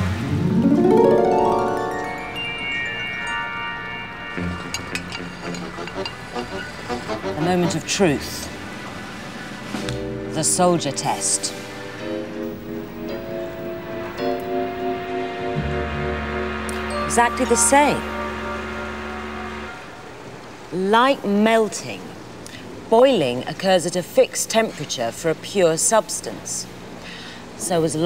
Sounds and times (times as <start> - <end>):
Music: 0.0 - 20.5
Speech: 7.4 - 8.5, 10.4 - 11.6, 20.8 - 22.2, 22.9 - 26.7, 27.6 - 28.0.